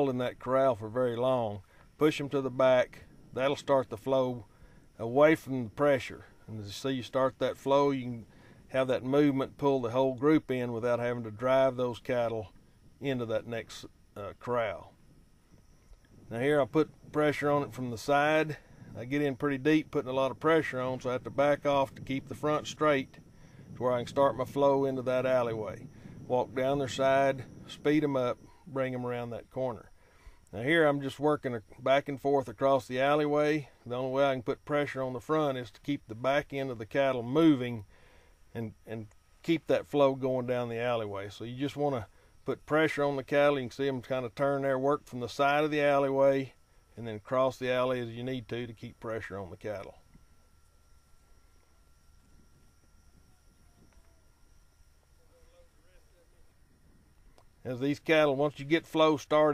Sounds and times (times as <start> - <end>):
Speech: 0.0 - 14.9, 16.3 - 23.2, 23.8 - 29.9, 30.5 - 37.9, 38.6 - 50.0, 57.6 - 59.5.